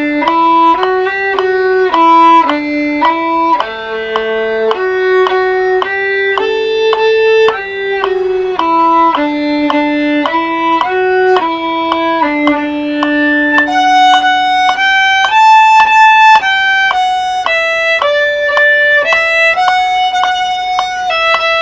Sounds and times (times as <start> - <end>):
Violin, fiddle: 0.0 - 21.6.